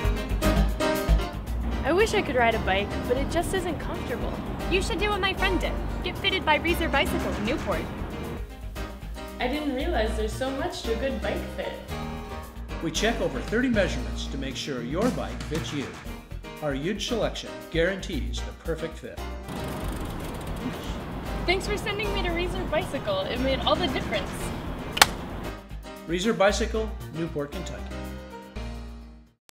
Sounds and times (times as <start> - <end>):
Music: 0.0 - 29.4
Speech: 9.4 - 11.9, 12.8 - 15.9, 16.6 - 19.2, 21.5 - 24.5, 26.1 - 27.9
Bicycle: 19.5 - 21.2.